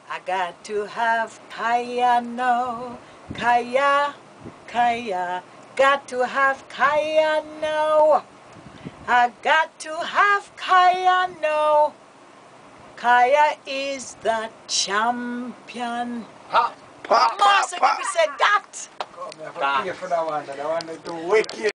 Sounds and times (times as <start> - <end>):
Speech: 16.5 - 21.7.